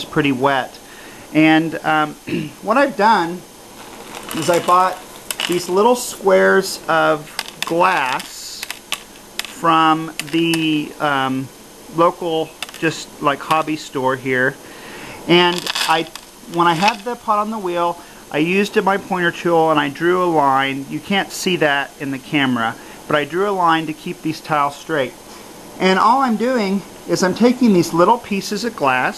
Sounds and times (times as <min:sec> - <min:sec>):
Speech: 0:00.0 - 0:03.5, 0:04.3 - 0:08.7, 0:09.5 - 0:14.6, 0:15.2 - 0:25.2, 0:25.8 - 0:29.1.